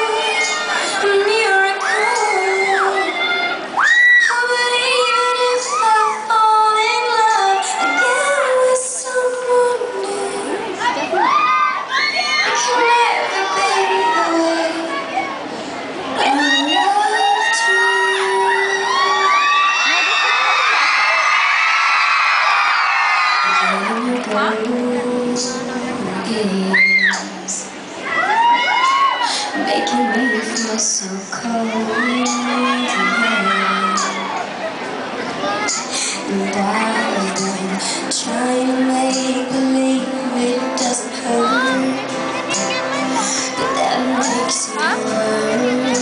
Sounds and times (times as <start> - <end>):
Singing: 0.0 - 10.9, 12.2 - 15.4, 16.1 - 19.7, 23.4 - 27.8, 28.8 - 34.5, 35.7 - 46.0
Inside, public space: 0.0 - 46.0
Music: 23.4 - 27.8, 35.7 - 46.0
Speech: 29.6 - 46.0.